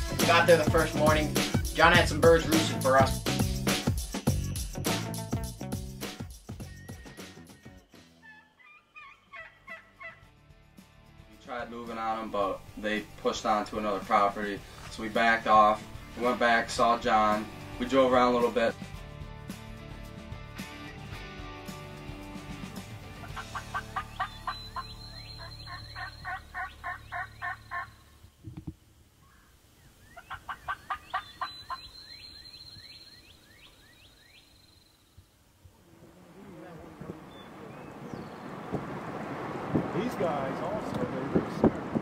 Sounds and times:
Gobble: 8.2 - 10.2, 23.2 - 24.6, 25.7 - 27.9, 30.2 - 31.8.

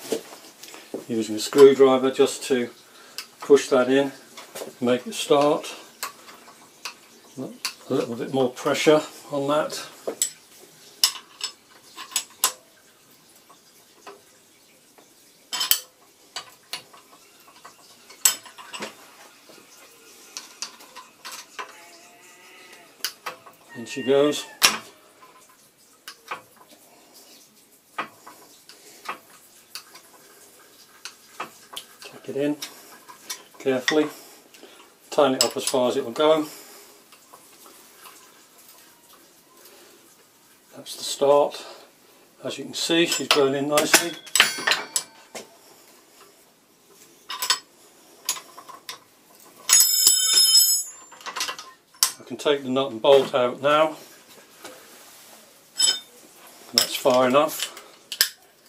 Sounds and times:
Speech: 1.1 - 2.8, 3.4 - 4.2, 4.8 - 5.8, 7.4 - 10.0, 23.8 - 24.6, 32.1 - 32.6, 33.6 - 34.2, 35.1 - 36.6, 40.7 - 44.2, 52.2 - 54.0, 56.7 - 57.8.

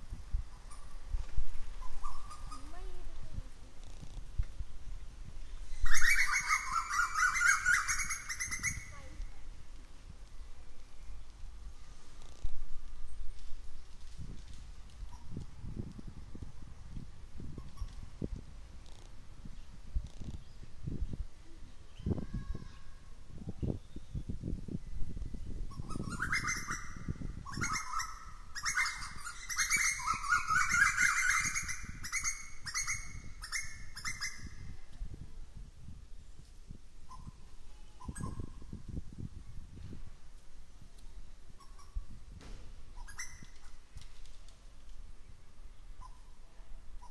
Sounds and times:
Rustling leaves: 0.0 - 47.1.

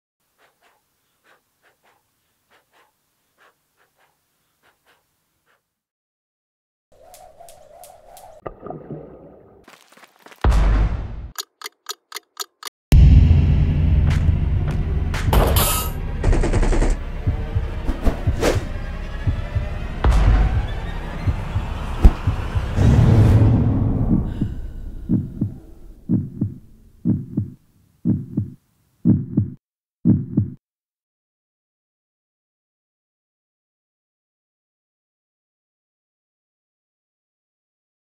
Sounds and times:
Heart sounds, heartbeat: 25.1 - 30.6.

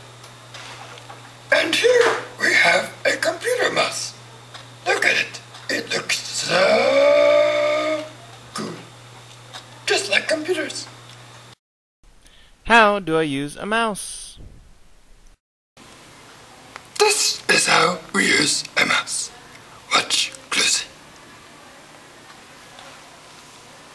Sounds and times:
Speech: 1.5 - 4.2, 4.8 - 6.8, 9.9 - 10.9, 12.7 - 14.4, 17.0 - 23.2.

